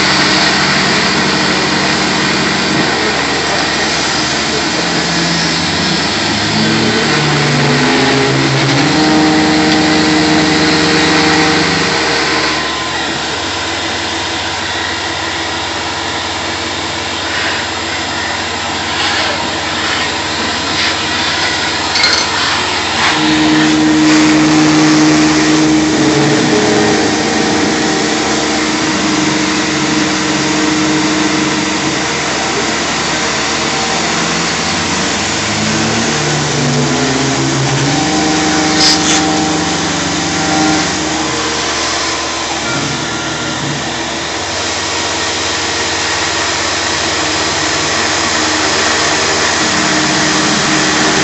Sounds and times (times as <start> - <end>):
Medium engine (mid frequency): 0.0 - 51.2.